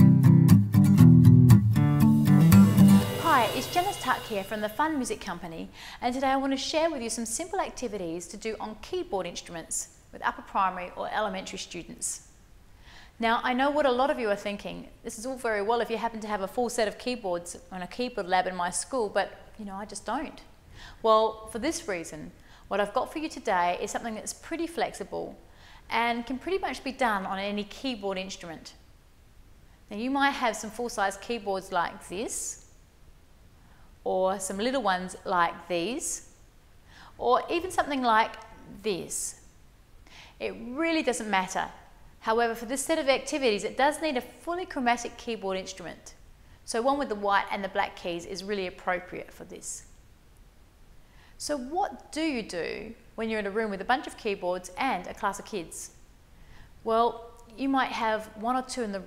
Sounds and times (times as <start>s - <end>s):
Speech: 3.2s - 12.2s, 13.2s - 28.8s, 29.9s - 32.6s, 34.1s - 36.3s, 37.2s - 39.4s, 40.4s - 49.9s, 51.4s - 56.0s, 56.8s - 59.0s.